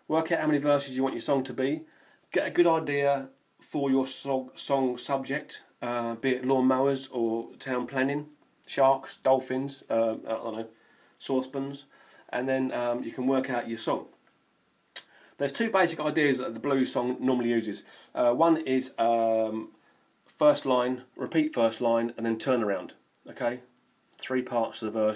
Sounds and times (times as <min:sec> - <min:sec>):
Speech: 0:00.0 - 0:14.2, 0:15.4 - 0:25.1.